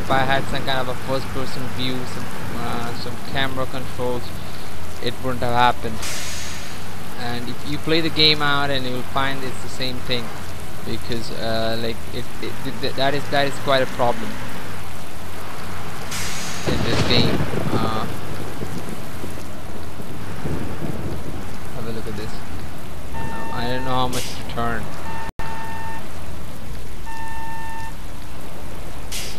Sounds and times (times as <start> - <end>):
Speech: 0.0 - 4.3, 5.0 - 6.0, 7.2 - 10.3, 10.9 - 14.4, 16.7 - 18.1, 21.8 - 22.4, 23.4 - 24.9
Bus: 0.0 - 29.3.